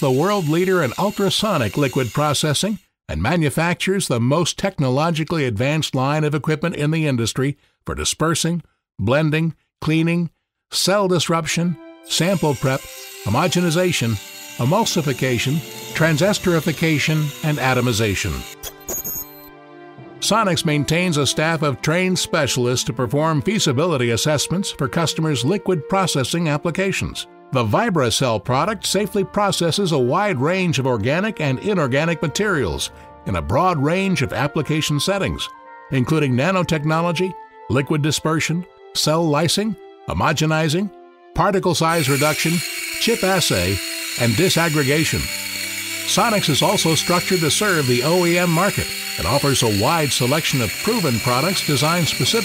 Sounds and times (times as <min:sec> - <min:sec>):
Music: 0:00.0 - 0:05.4, 0:10.7 - 0:52.4
Speech: 0:00.0 - 0:18.5, 0:20.2 - 0:45.3, 0:46.1 - 0:52.4.